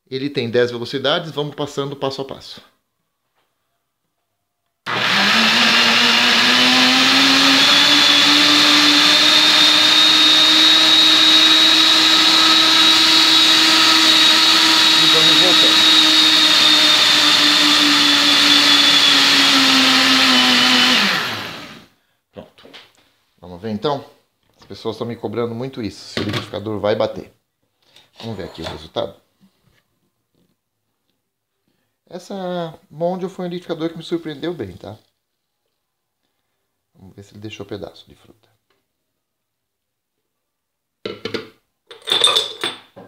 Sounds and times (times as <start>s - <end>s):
Speech: 0.0s - 2.8s, 14.9s - 16.0s, 22.4s - 22.7s, 23.4s - 27.4s, 28.2s - 29.3s, 32.1s - 35.1s, 37.0s - 38.6s
Blender: 4.9s - 21.9s.